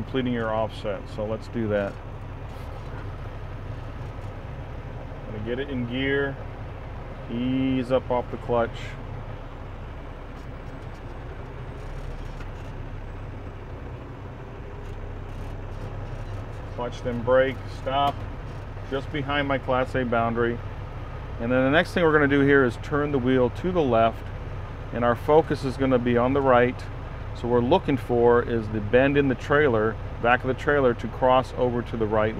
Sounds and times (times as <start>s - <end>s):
Speech: 0.0s - 2.0s, 5.3s - 6.4s, 7.3s - 9.0s, 16.8s - 18.2s, 18.8s - 20.6s, 21.4s - 24.3s, 24.9s - 32.3s
Vehicle: 0.0s - 32.3s.